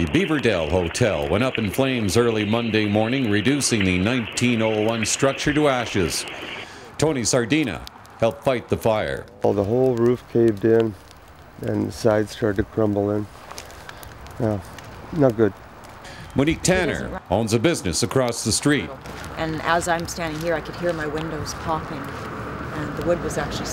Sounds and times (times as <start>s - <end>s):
Fire: 0.0s - 23.7s.